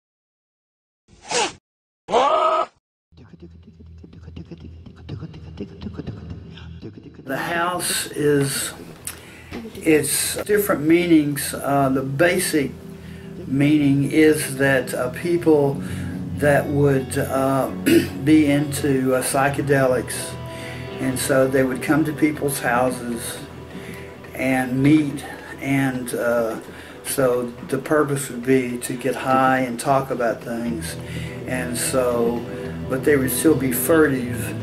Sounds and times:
Music: 3.2s - 34.6s
Speech: 7.3s - 8.8s, 9.6s - 12.8s, 13.4s - 15.8s, 16.4s - 20.4s, 21.0s - 23.5s, 24.4s - 34.6s.

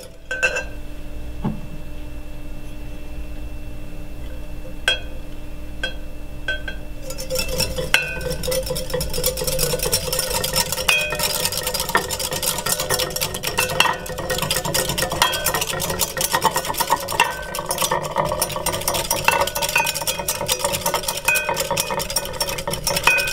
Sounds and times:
Inside, small room: 0.0s - 23.3s.

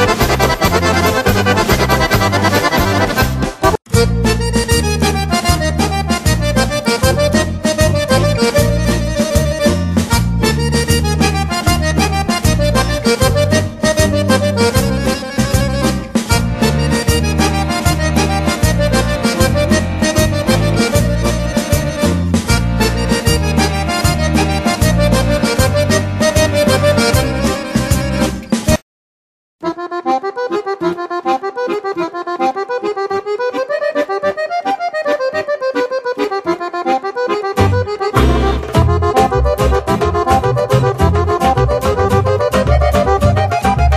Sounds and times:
Accordion: 0.0s - 28.8s, 29.6s - 43.9s.

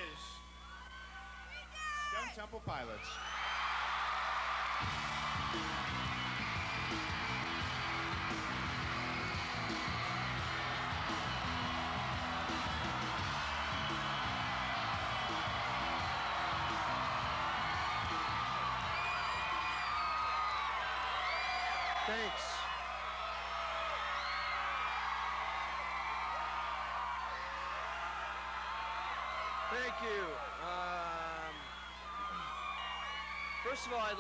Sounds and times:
Music: 4.7s - 20.4s.

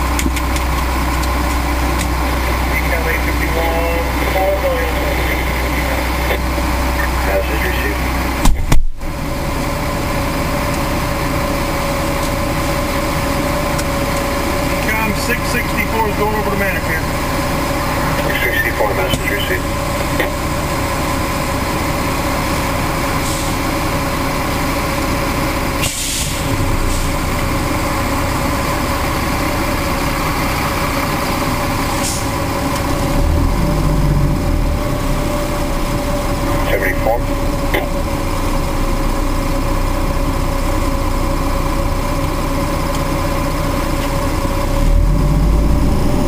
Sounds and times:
Engine: 0.0s - 46.2s
Vehicle: 0.0s - 46.2s
Speech: 2.7s - 6.4s, 7.0s - 8.1s, 14.8s - 17.1s, 18.2s - 19.7s, 36.5s - 38.0s.

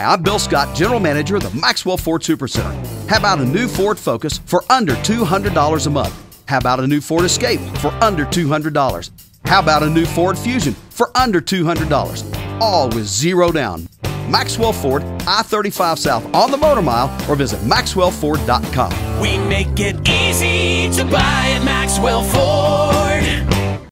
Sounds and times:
Speech: 0.0s - 19.4s
Music: 0.0s - 23.9s.

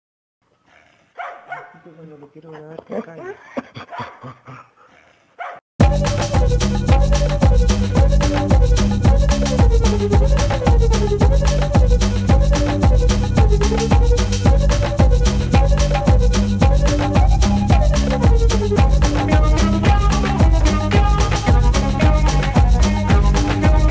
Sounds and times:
Bow-wow: 0.7s - 1.8s, 5.4s - 5.6s
Bark: 1.2s - 1.8s, 5.4s - 5.6s
Music: 5.8s - 23.9s.

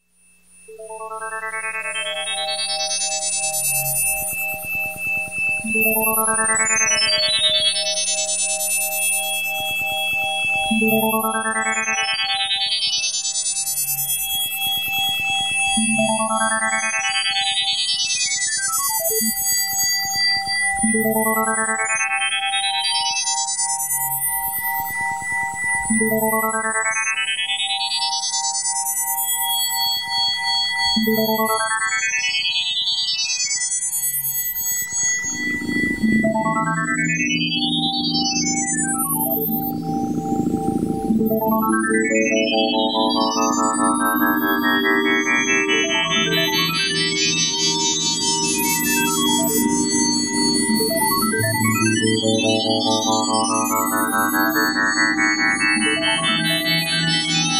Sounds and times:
Music: 0.0s - 57.5s
Sound effect: 35.2s - 57.5s.

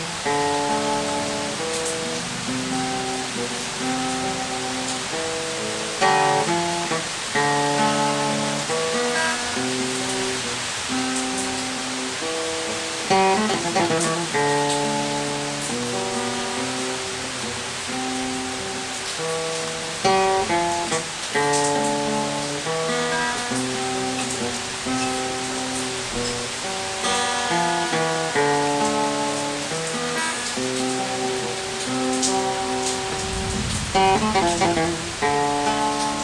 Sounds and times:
Acoustic guitar: 0.0s - 36.2s.

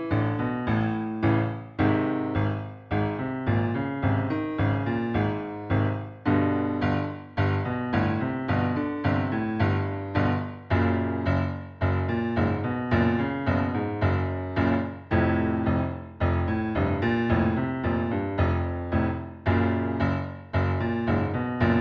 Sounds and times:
Music: 0.0s - 21.8s.

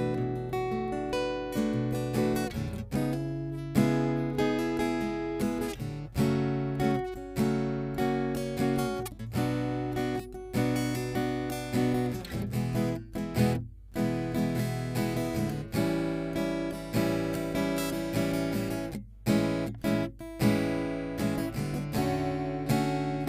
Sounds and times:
Acoustic guitar: 0.0s - 23.2s
Strum: 0.0s - 23.2s.

